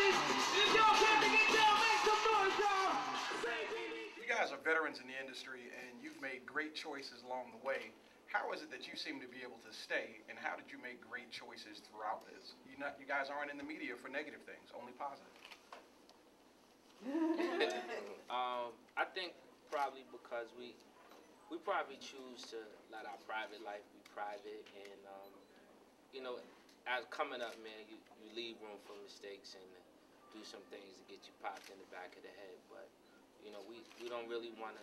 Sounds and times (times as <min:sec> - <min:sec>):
Speech: 0:00.6 - 0:15.3, 0:17.5 - 0:20.8, 0:21.5 - 0:25.4, 0:26.2 - 0:34.8.